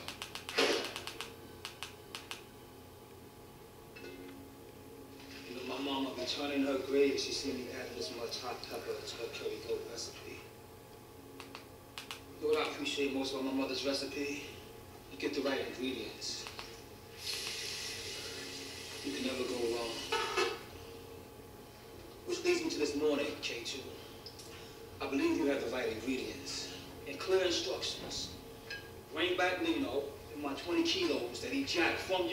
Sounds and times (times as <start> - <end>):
Speech: 5.5 - 10.5, 12.4 - 16.5, 19.0 - 20.2, 22.3 - 24.0, 25.0 - 28.4, 29.1 - 32.3.